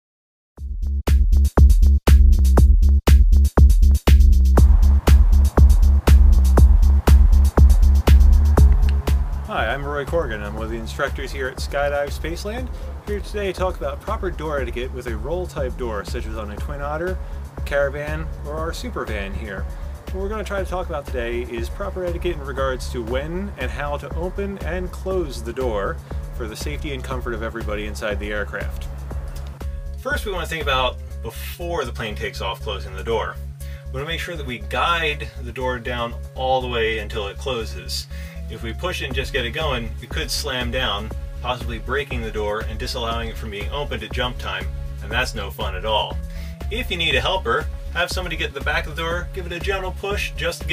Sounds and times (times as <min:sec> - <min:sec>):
Music: 0:00.6 - 0:50.7
Speech: 0:09.5 - 0:28.9, 0:30.0 - 0:50.7.